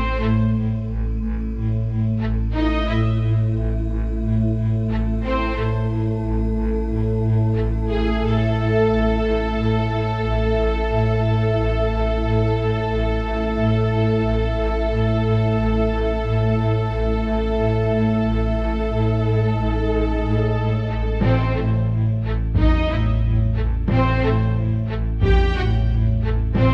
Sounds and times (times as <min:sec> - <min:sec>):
Music: 0:00.0 - 0:26.7.